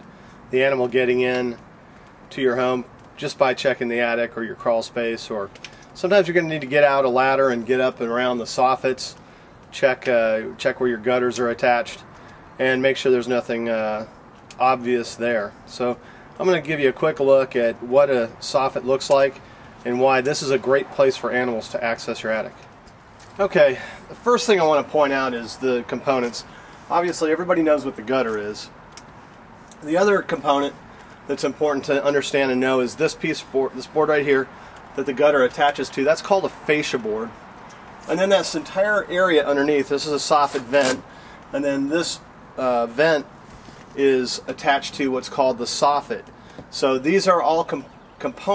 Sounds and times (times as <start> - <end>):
Speech: 0.5 - 1.6, 2.3 - 22.6, 23.4 - 28.7, 29.8 - 37.4, 38.1 - 43.3, 44.0 - 48.5.